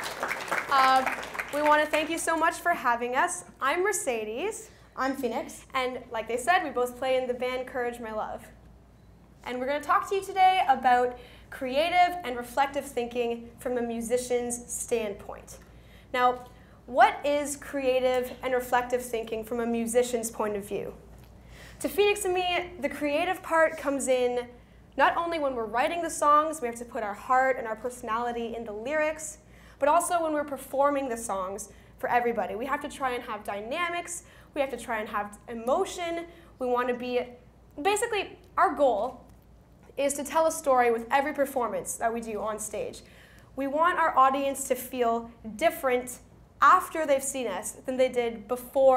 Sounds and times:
Speech: 0.7s - 8.6s, 9.4s - 21.0s, 21.8s - 39.2s, 40.0s - 43.0s, 43.6s - 48.9s.

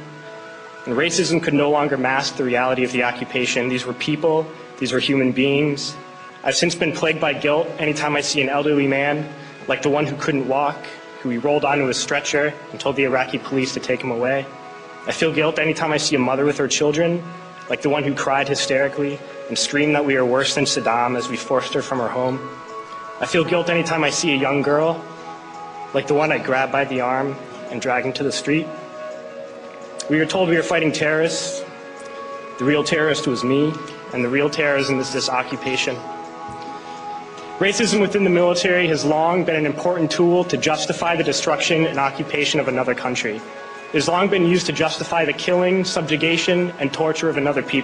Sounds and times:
Male speech, man speaking: 0.9s - 14.5s, 15.1s - 22.5s, 23.2s - 25.0s, 25.9s - 28.7s, 30.0s - 31.7s, 32.6s - 36.1s, 37.6s - 47.8s.

